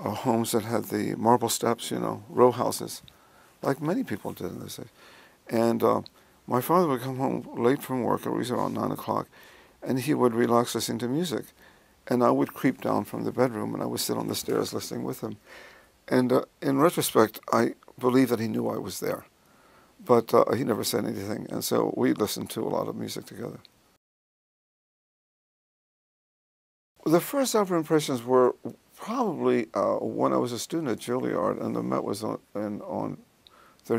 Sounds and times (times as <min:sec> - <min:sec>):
Speech: 0:00.0 - 0:04.9, 0:05.5 - 0:15.4, 0:16.1 - 0:19.3, 0:20.0 - 0:23.7, 0:27.0 - 0:33.2.